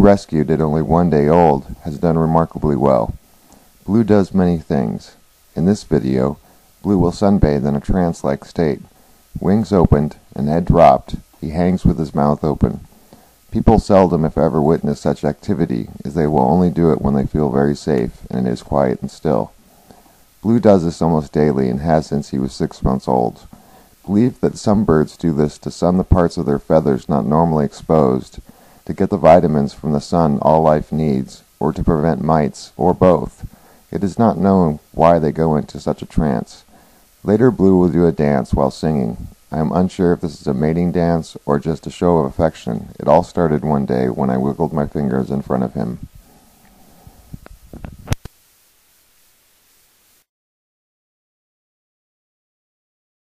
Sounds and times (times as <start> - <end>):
Narration, monologue: 0.0 - 48.2.